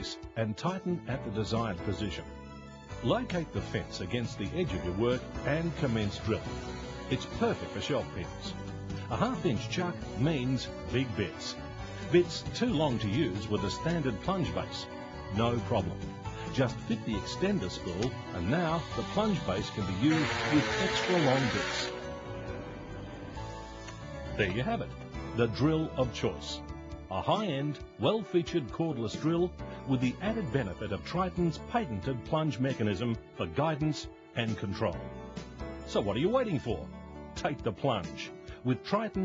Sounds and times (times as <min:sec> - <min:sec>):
Speech: 0:00.0 - 0:02.2, 0:03.0 - 0:06.4, 0:09.1 - 0:11.5, 0:12.1 - 0:14.8, 0:15.4 - 0:15.9, 0:16.5 - 0:21.8, 0:24.4 - 0:35.0, 0:35.9 - 0:39.2
Music: 0:00.0 - 0:39.2.